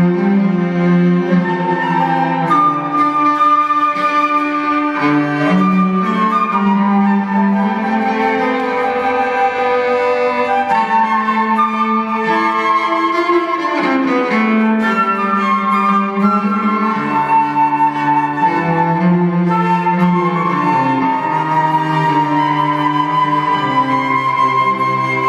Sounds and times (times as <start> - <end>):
Cello: 0.0 - 25.2
Flute: 0.0 - 25.2
Violin, fiddle: 0.0 - 25.2.